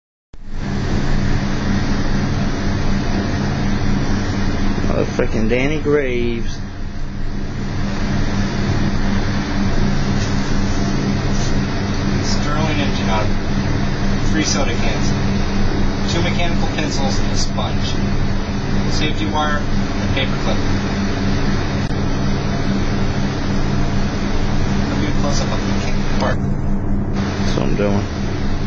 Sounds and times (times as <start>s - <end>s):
Speech: 4.8s - 6.6s, 12.2s - 13.4s, 14.3s - 15.2s, 16.1s - 18.0s, 18.9s - 20.6s, 24.9s - 26.4s, 27.5s - 28.1s.